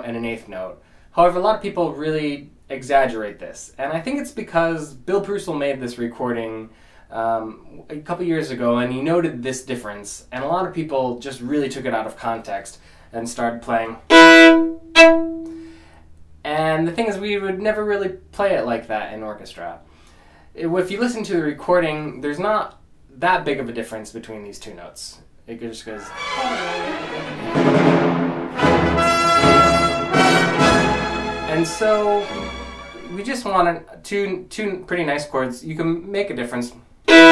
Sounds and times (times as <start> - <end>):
Speech: 0.0 - 14.1, 16.4 - 19.8, 20.6 - 27.6, 31.5 - 32.4, 33.1 - 37.3
Violin, fiddle: 25.9 - 27.8.